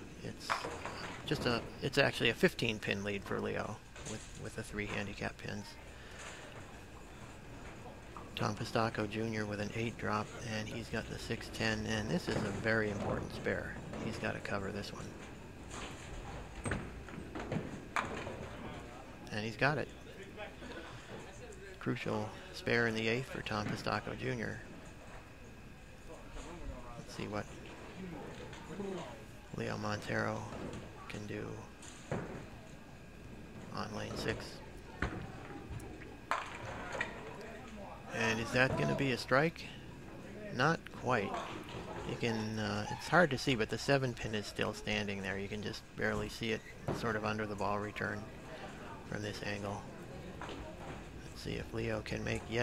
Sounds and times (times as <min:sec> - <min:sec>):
Inside, public space: 0:00.0 - 0:52.6
Speech: 0:00.2 - 0:05.8, 0:07.8 - 0:15.1, 0:18.6 - 0:24.7, 0:26.0 - 0:31.7, 0:33.7 - 0:34.7, 0:37.4 - 0:50.6, 0:51.2 - 0:52.6.